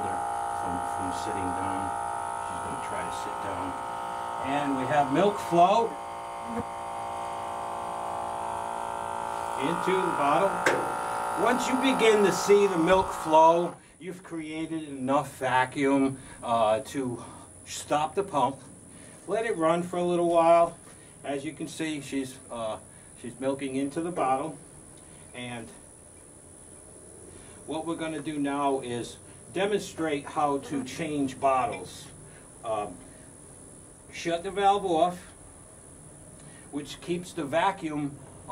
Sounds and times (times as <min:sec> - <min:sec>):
Speech: 0:00.0 - 0:01.9, 0:02.5 - 0:03.8, 0:04.4 - 0:06.6, 0:09.6 - 0:10.6, 0:11.4 - 0:18.6, 0:19.3 - 0:24.6, 0:25.4 - 0:25.8, 0:27.7 - 0:33.0, 0:34.1 - 0:35.4, 0:36.8 - 0:38.5
Electric shaver, electric razor: 0:00.0 - 0:13.8.